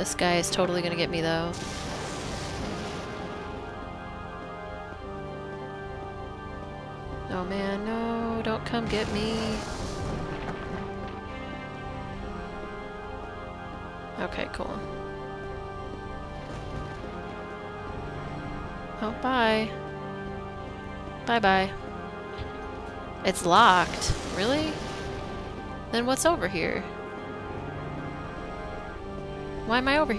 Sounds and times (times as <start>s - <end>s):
Speech: 0.0s - 1.6s, 7.3s - 9.6s, 14.2s - 14.8s, 19.0s - 19.8s, 21.3s - 21.8s, 23.3s - 24.8s, 26.0s - 26.9s, 29.7s - 30.1s
Music: 0.0s - 30.1s.